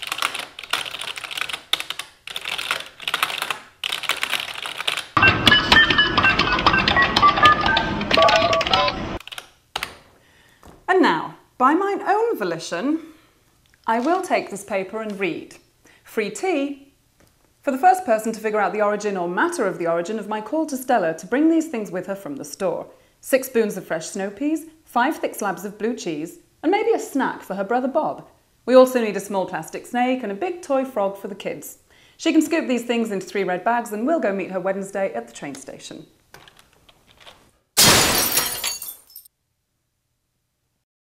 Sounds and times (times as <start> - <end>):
Speech: 10.9 - 13.2, 13.9 - 16.9, 17.6 - 36.2
Breaking: 37.2 - 39.3.